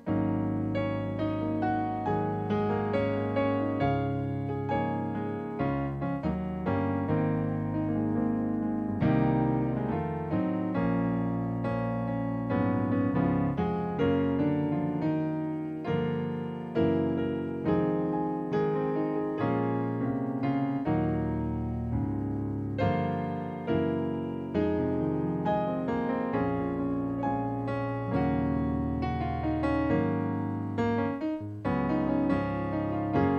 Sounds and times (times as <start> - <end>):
Music: 0.0 - 33.3.